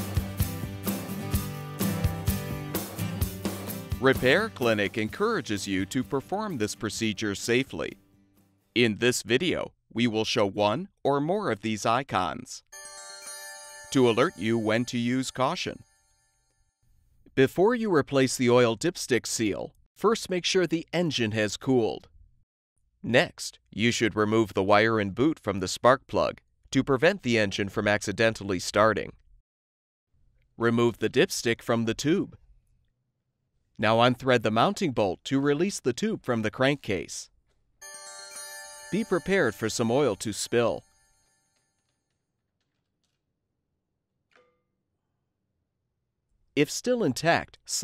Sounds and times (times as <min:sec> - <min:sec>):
Speech: 0:04.0 - 0:08.0, 0:08.8 - 0:12.7, 0:13.9 - 0:15.8, 0:17.3 - 0:22.1, 0:23.0 - 0:29.2, 0:30.6 - 0:32.4, 0:33.8 - 0:37.3, 0:39.0 - 0:40.8, 0:46.6 - 0:47.8.